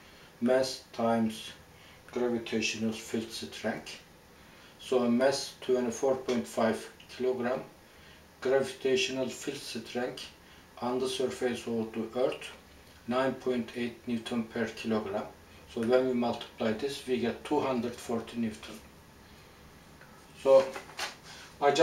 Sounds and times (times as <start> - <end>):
Inside, small room: 0.0 - 21.8
Speech: 0.4 - 4.1, 4.8 - 7.7, 8.4 - 18.9, 20.4 - 20.8, 21.6 - 21.8.